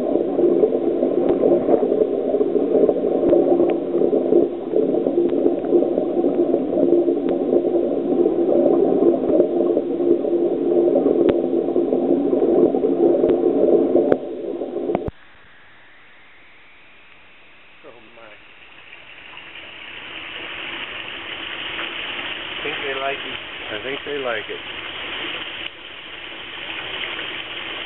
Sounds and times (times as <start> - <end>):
Speech: 17.8 - 18.4, 22.6 - 24.6.